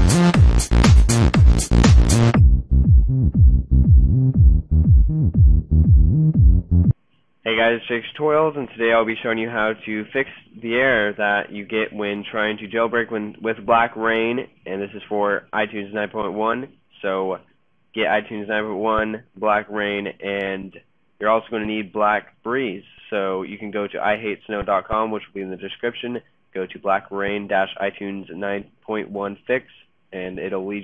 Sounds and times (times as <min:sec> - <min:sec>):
Music: 0:00.0 - 0:07.0
Speech: 0:07.4 - 0:30.8.